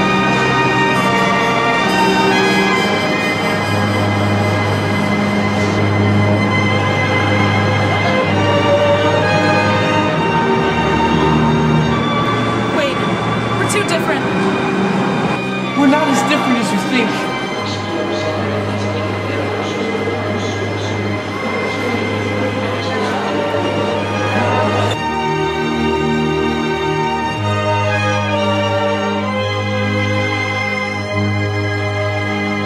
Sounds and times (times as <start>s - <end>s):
Theme music: 0.0s - 32.0s.